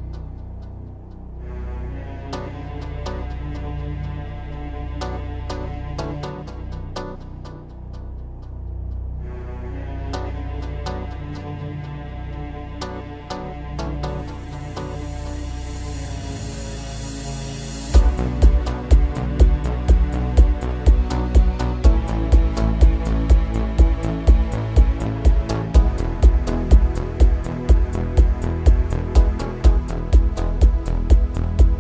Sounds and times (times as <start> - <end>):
Music: 0.0 - 31.8.